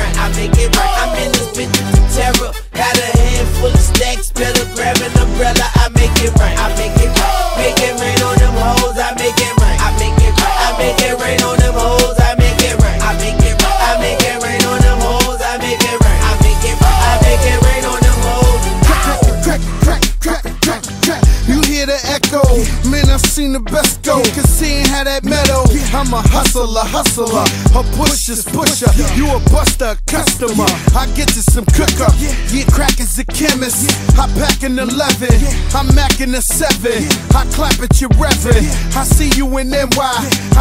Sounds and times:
Music: 0:00.0 - 0:40.6.

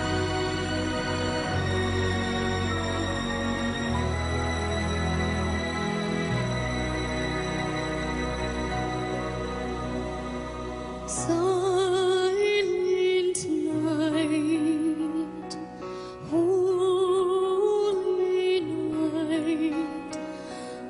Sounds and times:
Music: 0:00.0 - 0:20.8.

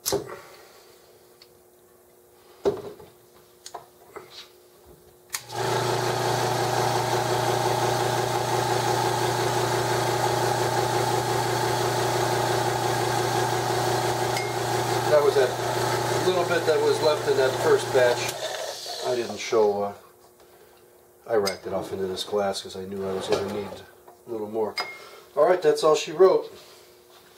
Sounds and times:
Speech: 0:15.1 - 0:15.6, 0:16.2 - 0:18.4, 0:19.0 - 0:20.1, 0:21.3 - 0:24.8, 0:25.4 - 0:26.6.

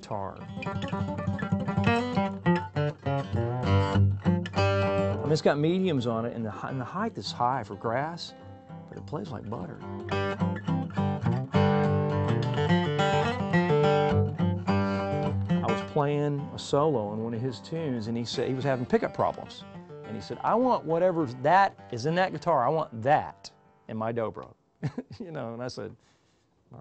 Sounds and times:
Speech: 0:00.0 - 0:00.4, 0:05.3 - 0:08.3, 0:09.0 - 0:09.9, 0:15.6 - 0:26.0
Guitar: 0:00.0 - 0:25.9.

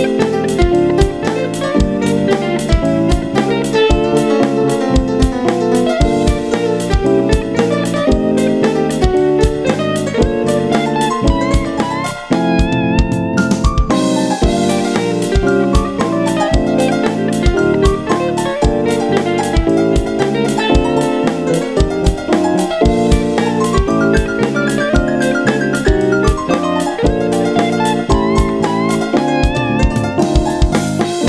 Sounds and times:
Background music: 0:00.0 - 0:31.2
Guitar: 0:00.0 - 0:31.2.

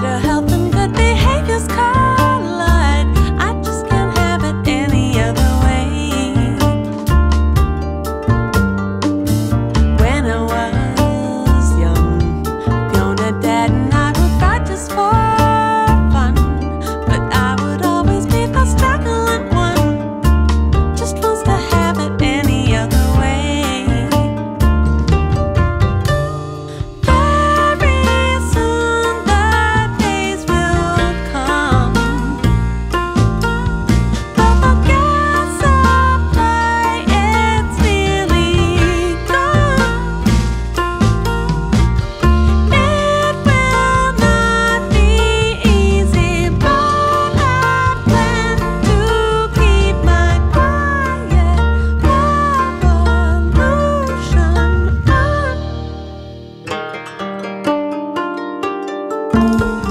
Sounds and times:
Rhythm and blues: 0:00.0 - 0:59.9.

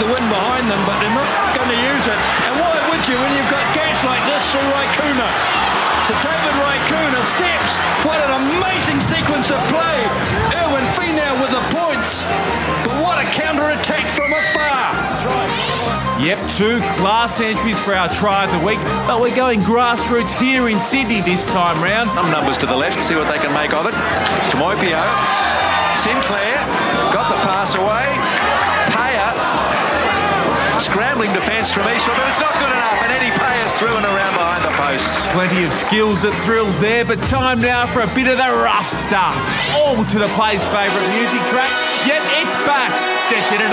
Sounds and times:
Speech: 0:00.0 - 0:05.4, 0:06.0 - 0:25.2, 0:25.9 - 0:28.2, 0:28.9 - 0:29.4, 0:30.7 - 0:43.7
Music: 0:00.0 - 0:43.7.

